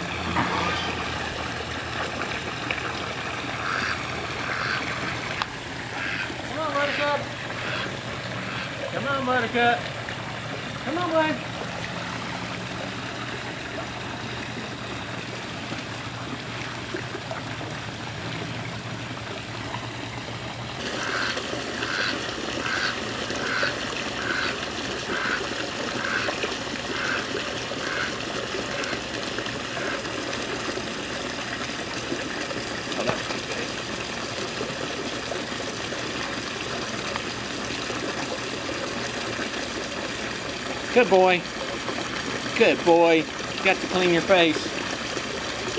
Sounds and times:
Gush: 0.0 - 45.7
Speech: 6.5 - 7.3, 8.9 - 9.8, 10.8 - 11.4, 40.9 - 41.5, 42.5 - 44.7.

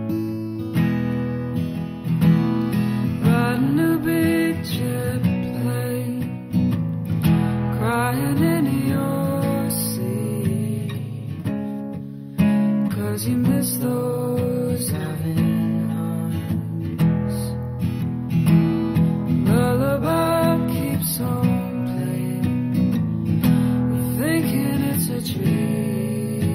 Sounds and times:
Music: 0.0 - 26.5.

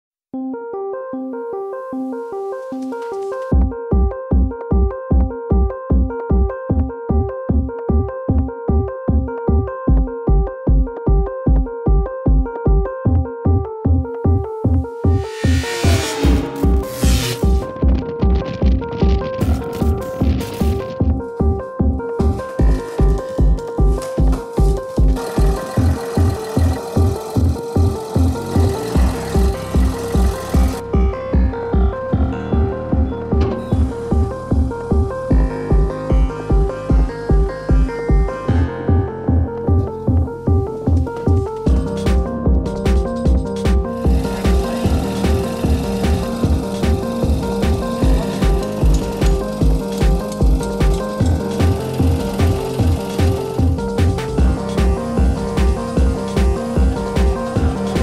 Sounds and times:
Synthesizer: 0.4 - 58.0.

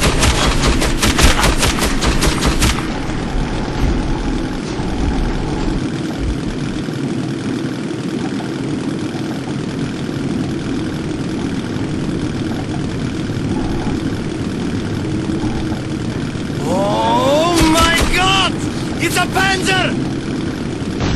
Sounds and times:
Speech: 16.6 - 20.0.

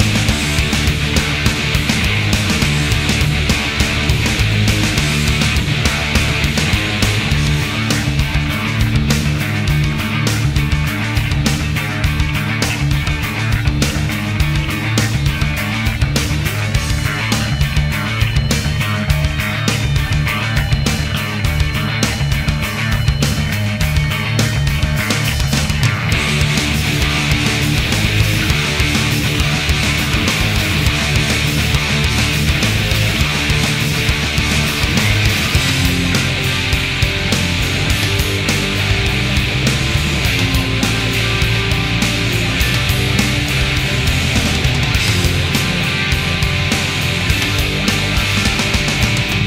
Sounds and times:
Music: 0.0 - 49.4.

